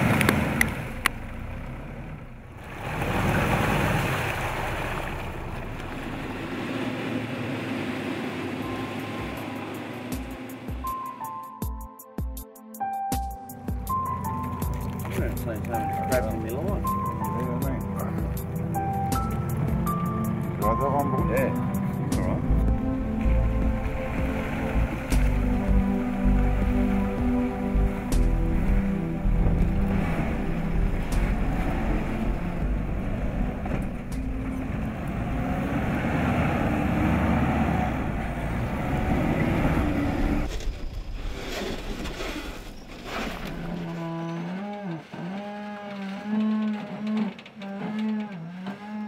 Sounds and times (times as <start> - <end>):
Car: 0.0 - 10.9, 16.8 - 49.0.